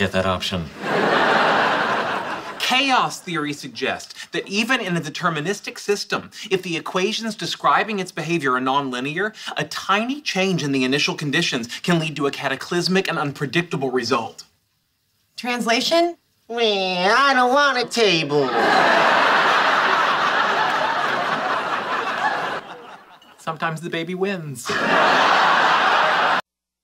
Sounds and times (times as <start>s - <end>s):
Speech: 0.0s - 0.7s, 2.6s - 14.5s, 15.4s - 18.6s, 23.4s - 24.7s.